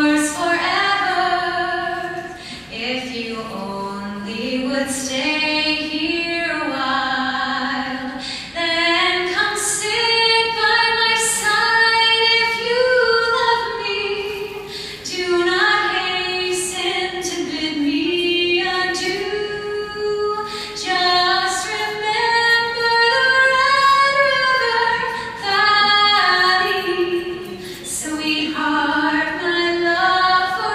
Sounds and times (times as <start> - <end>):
Female singing: 0.0 - 30.7.